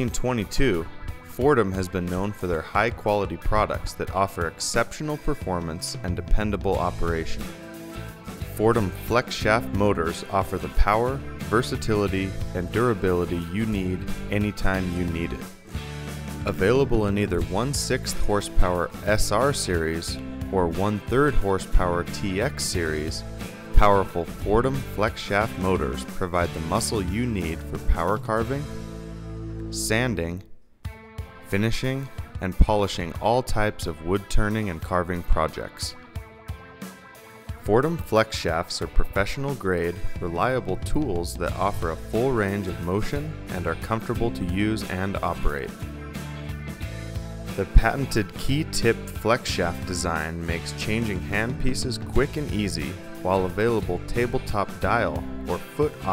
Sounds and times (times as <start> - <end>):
Speech: 0.0 - 7.5, 8.4 - 15.5, 16.5 - 23.2, 23.8 - 28.7, 29.7 - 30.6, 31.5 - 36.0, 37.6 - 45.8, 47.6 - 56.1
Music: 0.0 - 56.1.